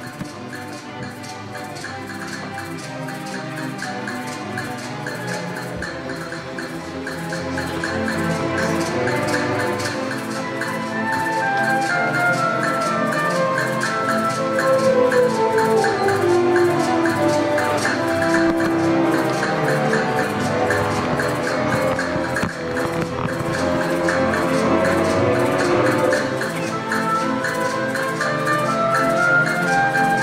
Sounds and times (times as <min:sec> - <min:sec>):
Classical music: 0:00.0 - 0:30.2.